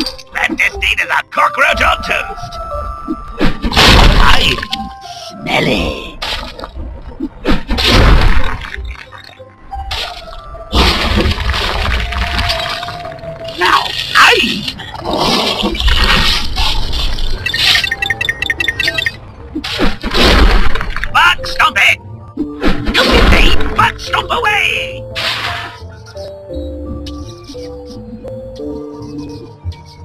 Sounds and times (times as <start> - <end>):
Music: 0.0 - 30.0
Outside, urban or manmade: 0.0 - 30.0.